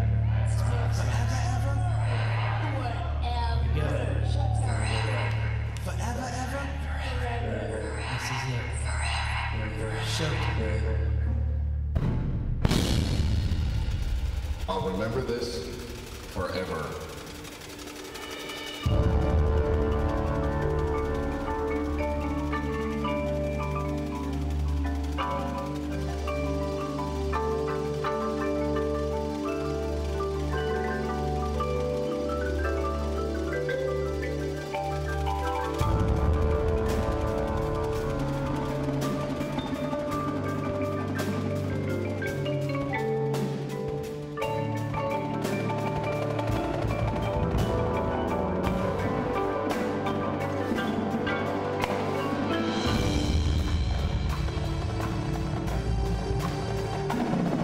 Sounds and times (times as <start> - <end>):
Percussion: 0.0 - 57.6.